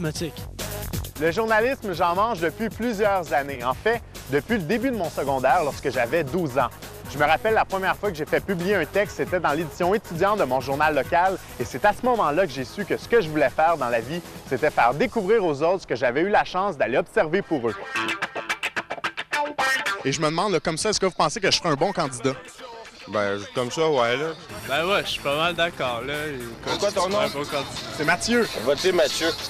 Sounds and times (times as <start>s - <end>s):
Speech: 0.0s - 0.4s, 1.2s - 17.8s, 20.1s - 22.4s, 23.1s - 29.5s
Music: 0.0s - 29.5s.